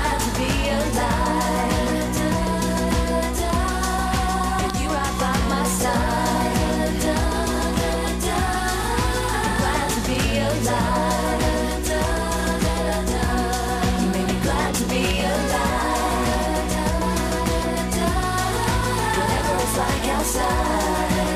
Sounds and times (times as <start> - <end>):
Pop music: 0.0 - 21.3.